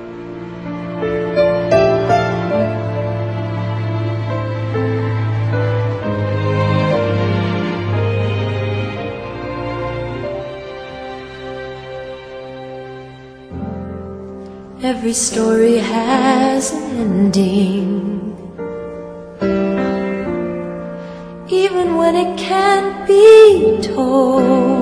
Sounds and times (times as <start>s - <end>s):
Music: 0.0s - 24.8s.